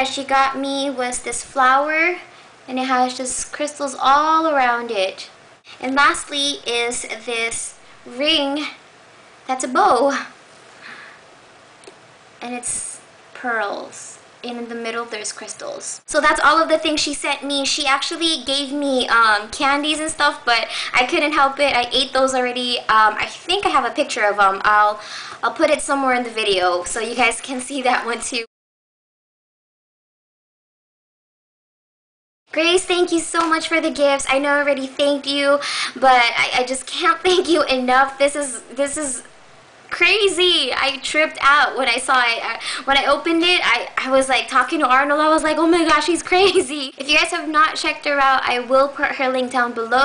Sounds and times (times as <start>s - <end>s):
Speech: 0.0s - 8.8s, 9.5s - 10.4s, 12.4s - 28.5s, 32.5s - 39.3s, 39.9s - 50.0s.